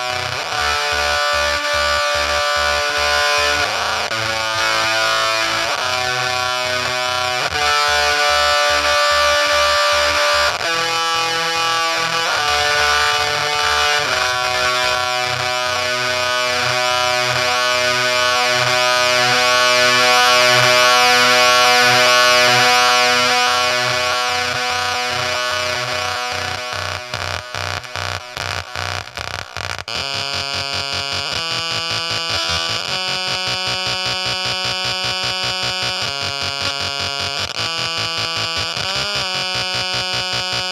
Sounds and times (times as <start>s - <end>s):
Effects unit: 0.0s - 40.7s.